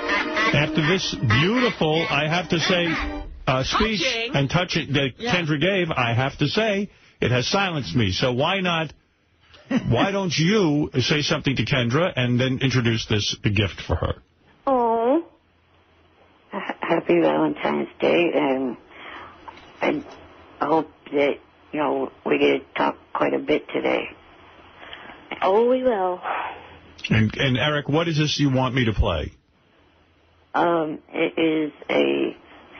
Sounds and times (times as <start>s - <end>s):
Speech: 0.6s - 9.0s, 9.7s - 14.2s, 27.0s - 29.4s.